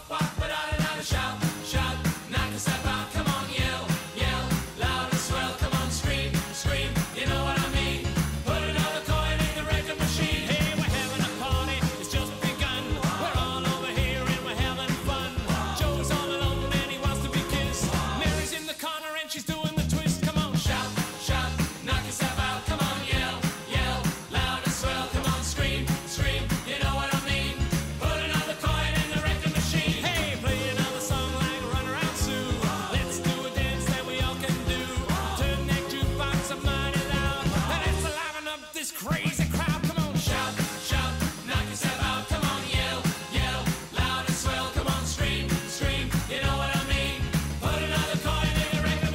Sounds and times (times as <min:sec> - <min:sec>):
Music: 0:00.0 - 0:49.1.